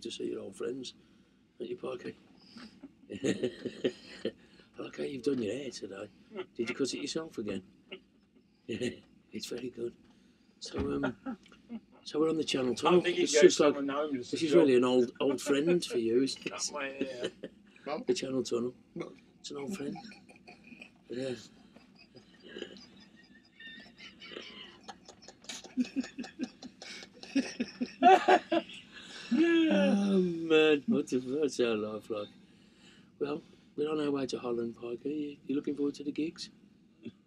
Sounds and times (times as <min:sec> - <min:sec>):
Speech: 0:00.0 - 0:00.9, 0:01.6 - 0:07.6, 0:08.7 - 0:09.9, 0:10.6 - 0:11.4, 0:12.1 - 0:21.5, 0:23.6 - 0:32.3, 0:33.2 - 0:36.5.